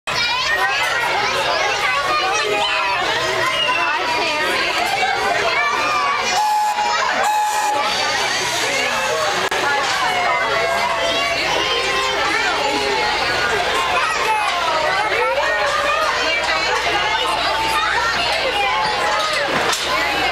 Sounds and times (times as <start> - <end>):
Crowd: 0.1 - 20.3.